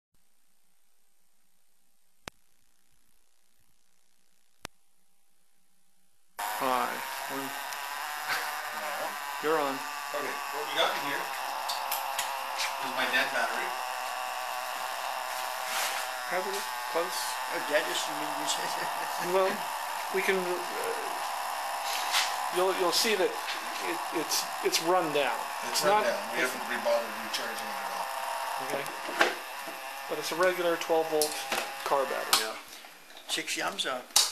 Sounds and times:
Electric shaver, electric razor: 0:06.4 - 0:32.9
Speech: 0:08.8 - 0:11.4, 0:12.8 - 0:13.8, 0:16.3 - 0:21.2, 0:22.5 - 0:27.8, 0:30.1 - 0:32.6, 0:33.3 - 0:34.1.

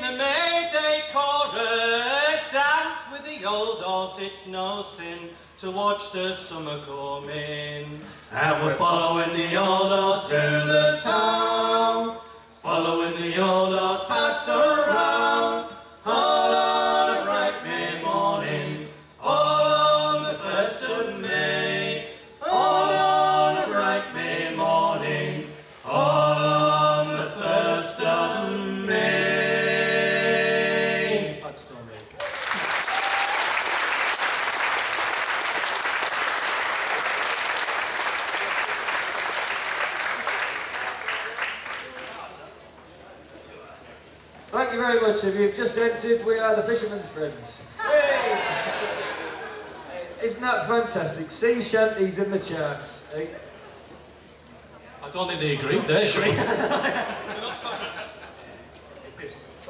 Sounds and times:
Singing: 0:00.0 - 0:31.6.

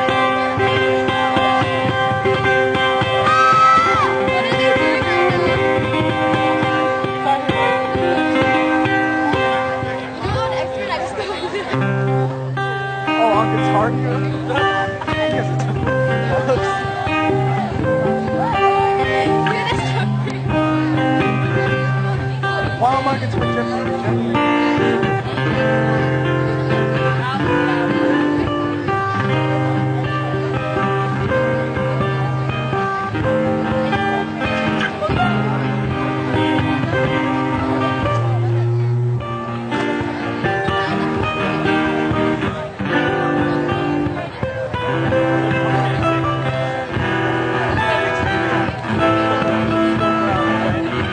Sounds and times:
Acoustic guitar: 0:00.0 - 0:51.1
Speech: 0:03.0 - 0:51.1
Strum: 0:11.6 - 0:51.1.

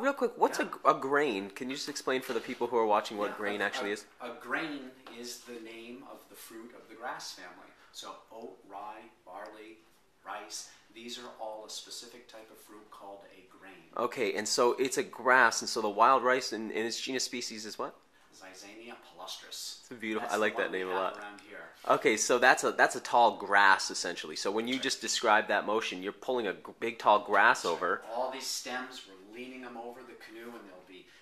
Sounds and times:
Speech: 0:00.0 - 0:31.1
Inside, small room: 0:00.0 - 0:31.2.

